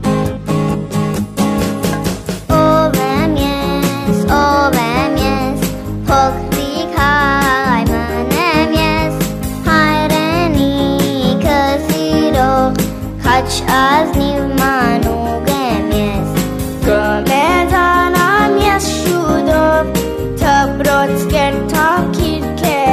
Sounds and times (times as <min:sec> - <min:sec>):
Happy music: 0:00.0 - 0:22.9
Music for children: 0:00.0 - 0:22.9.